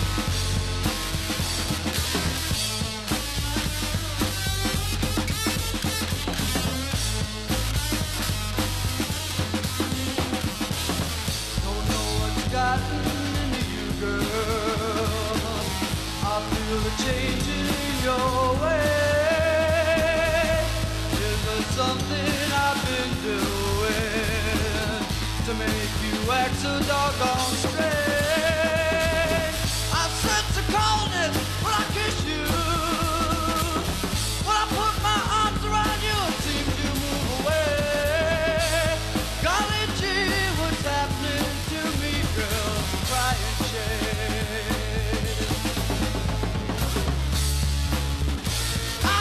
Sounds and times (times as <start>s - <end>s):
Music: 0.0s - 49.2s.